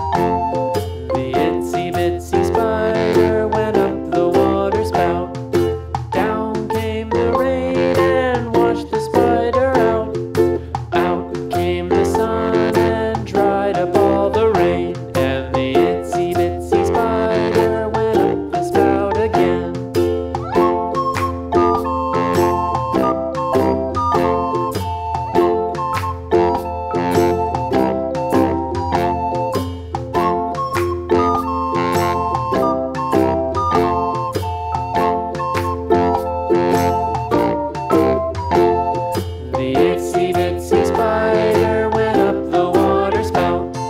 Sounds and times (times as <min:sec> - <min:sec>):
Music: 0:00.0 - 0:43.9.